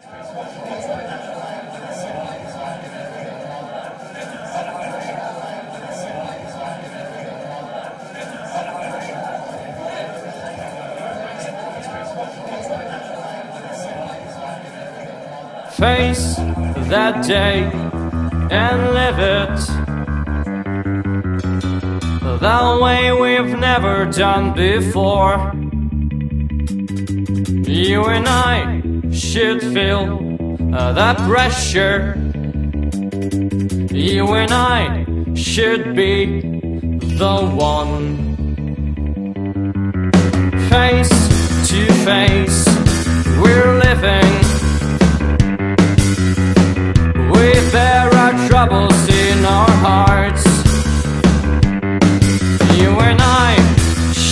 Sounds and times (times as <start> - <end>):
Music: 15.8 - 54.3.